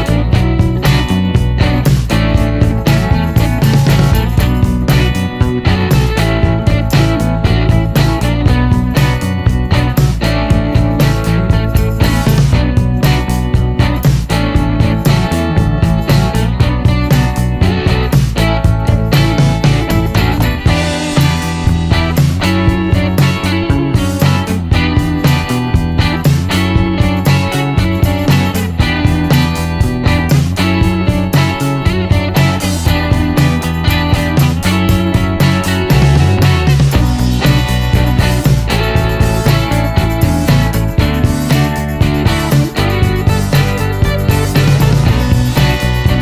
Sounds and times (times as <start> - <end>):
Music: 0.0 - 46.2.